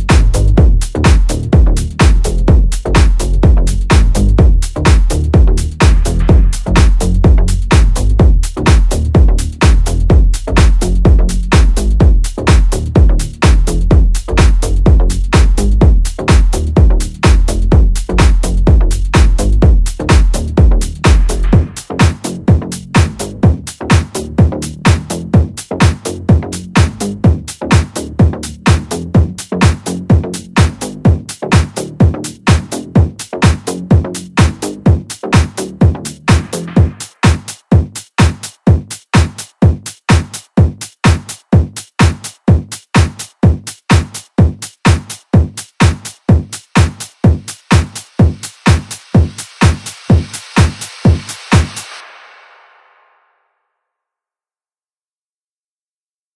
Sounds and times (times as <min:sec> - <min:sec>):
Music: 0:00.0 - 0:54.3.